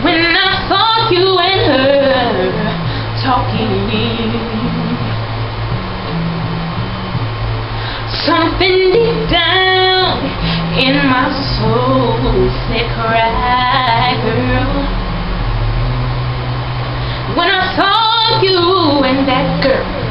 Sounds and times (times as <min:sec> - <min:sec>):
Female singing: 0:00.0 - 0:05.1, 0:08.1 - 0:14.9, 0:17.3 - 0:20.1
Music: 0:00.0 - 0:20.1.